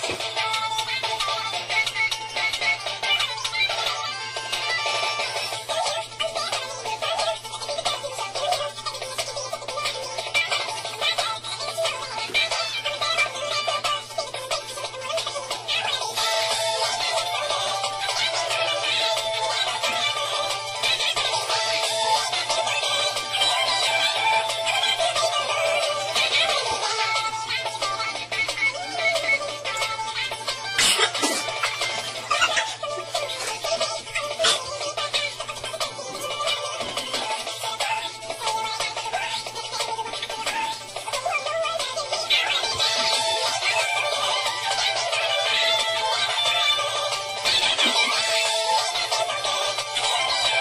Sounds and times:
Music: 0.0 - 50.6.

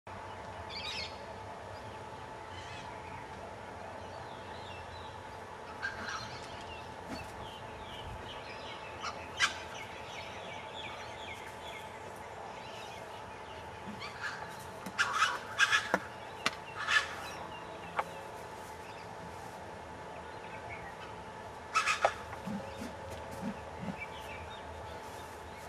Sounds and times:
Bird vocalization, bird call, bird song: 0.1 - 25.6
Outside, rural or natural: 0.1 - 25.6.

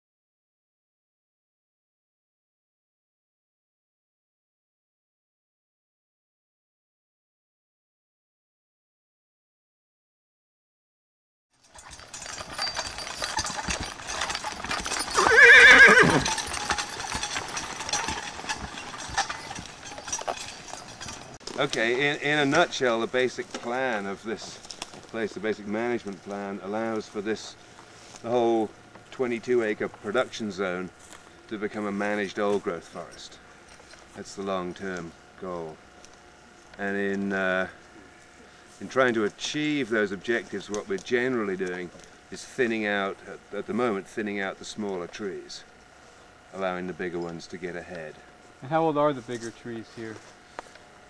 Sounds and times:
Neigh, whinny: 14.6 - 17.2.

